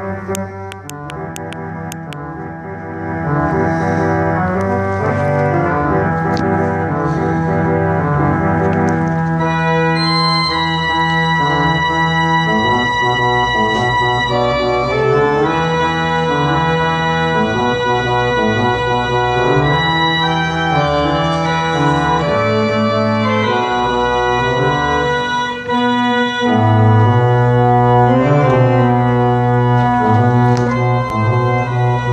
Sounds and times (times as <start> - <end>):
Piano: 0.0 - 32.1.